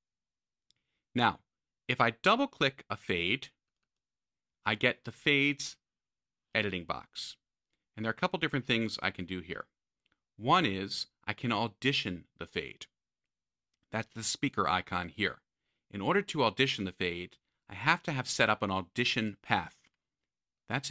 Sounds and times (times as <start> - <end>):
Speech: 1.1 - 3.6, 4.6 - 5.9, 6.5 - 7.4, 8.0 - 9.8, 10.4 - 13.0, 13.9 - 19.9, 20.7 - 20.9.